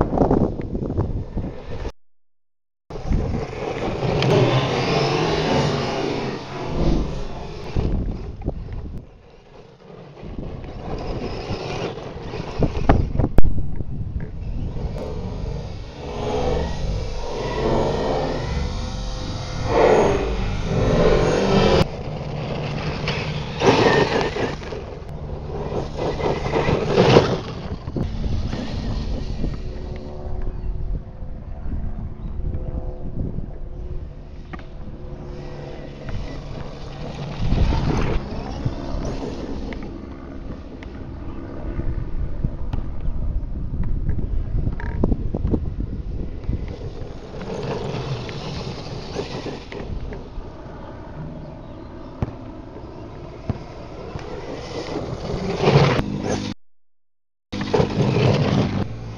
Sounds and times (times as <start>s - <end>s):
Outside, rural or natural: 0.0s - 2.0s, 2.9s - 59.1s.